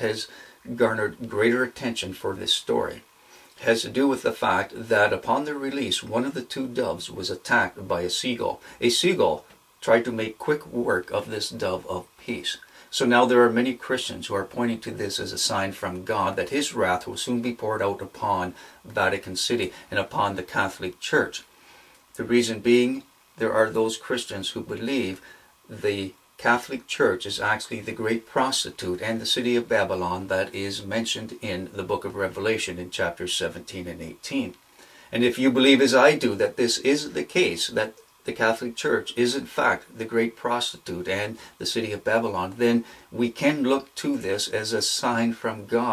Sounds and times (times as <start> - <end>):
Speech: 0.0 - 21.5, 22.2 - 45.9.